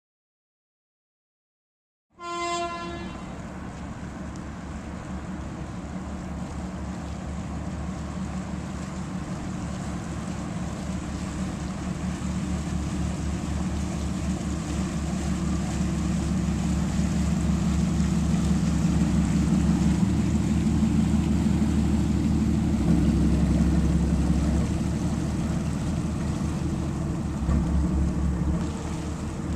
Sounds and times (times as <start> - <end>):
Ship: 2.2 - 29.5.